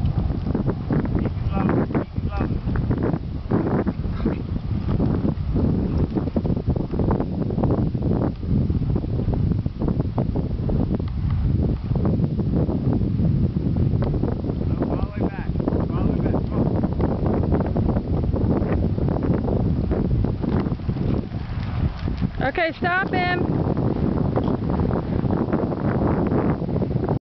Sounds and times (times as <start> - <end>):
Clip-clop: 0.0 - 27.2
Speech: 22.4 - 23.4.